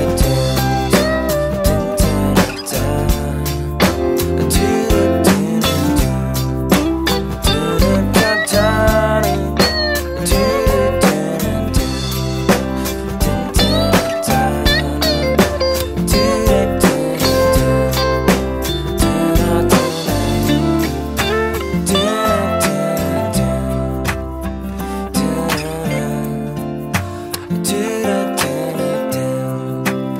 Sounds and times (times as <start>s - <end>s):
Independent music: 0.0s - 30.1s.